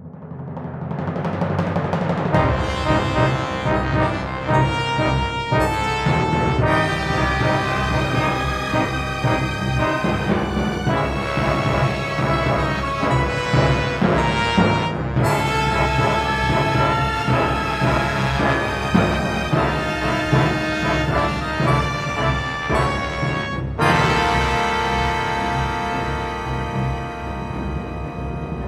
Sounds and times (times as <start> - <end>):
Bass drum: 2.2 - 24.8.